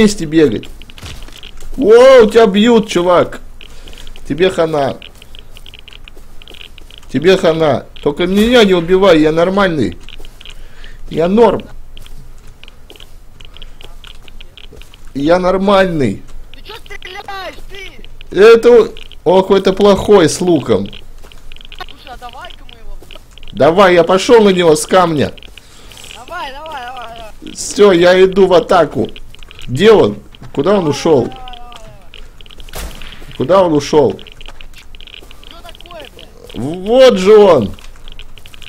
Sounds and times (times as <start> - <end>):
Speech: 15.2 - 21.0, 21.8 - 23.0, 26.1 - 32.2, 35.5 - 37.8.